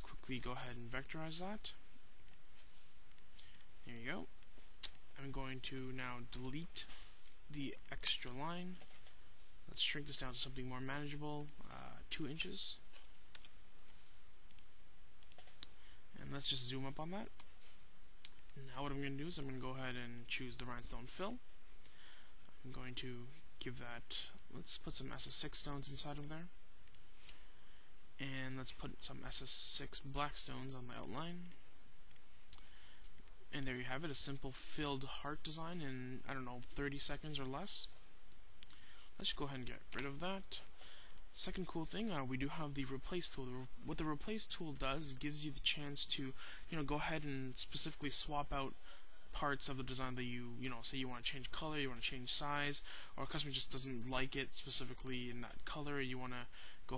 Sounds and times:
Speech: 0.0s - 1.8s, 3.8s - 6.9s, 7.5s - 8.9s, 9.7s - 12.8s, 16.2s - 17.4s, 18.6s - 21.5s, 22.6s - 26.6s, 28.2s - 31.6s, 33.5s - 38.0s, 39.2s - 40.7s, 41.3s - 56.9s.

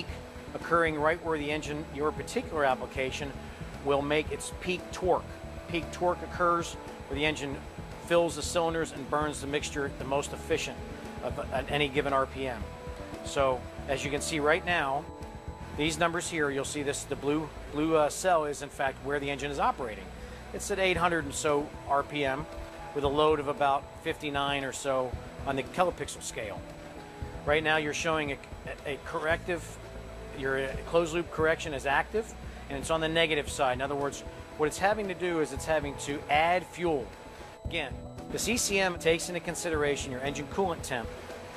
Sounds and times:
Speech: 0.0s - 12.7s, 13.3s - 15.0s, 15.8s - 26.6s, 27.5s - 29.8s, 30.4s - 37.1s, 37.7s - 41.1s
Music: 0.0s - 41.5s.

